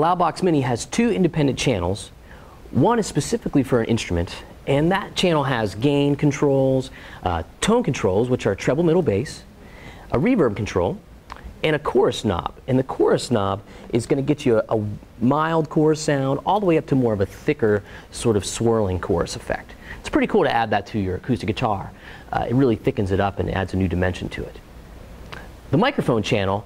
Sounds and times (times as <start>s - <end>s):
Speech: 0.0s - 9.5s, 10.1s - 11.0s, 11.6s - 24.6s, 25.7s - 26.6s.